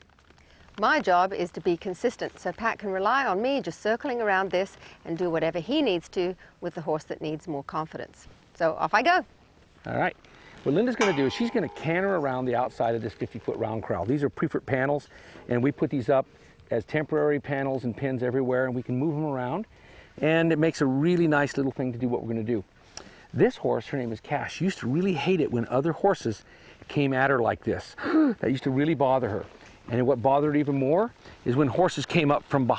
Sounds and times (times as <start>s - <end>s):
Clip-clop: 0.0s - 32.7s
Speech: 0.8s - 9.2s, 9.9s - 22.6s, 23.4s - 32.7s.